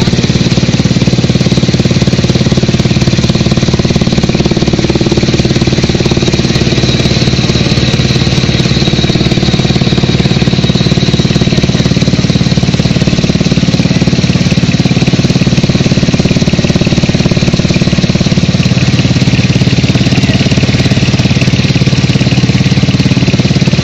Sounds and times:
Outside, rural or natural: 0.0s - 23.8s.

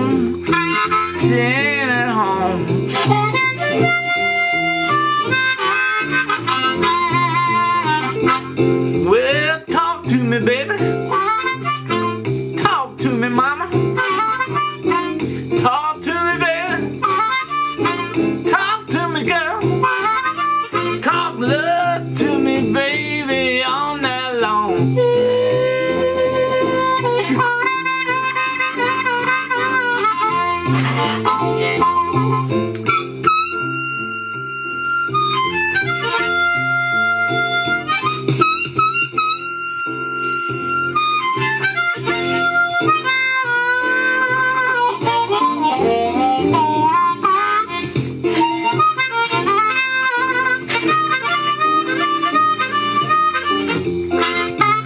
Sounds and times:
Wind instrument, woodwind instrument: 0.0s - 1.6s, 2.9s - 8.6s, 11.1s - 12.3s, 14.0s - 15.2s, 17.0s - 18.2s, 19.8s - 21.0s, 25.0s - 54.8s
Harmonica: 0.0s - 9.1s, 10.8s - 22.5s, 24.9s - 54.8s.

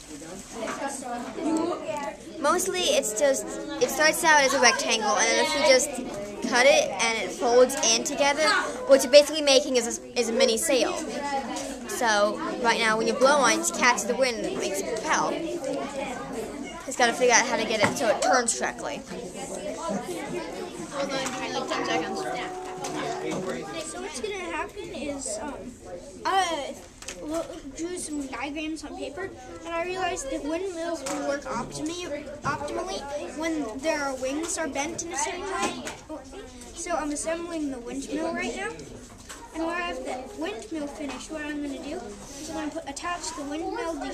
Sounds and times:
Speech: 0.0s - 44.1s.

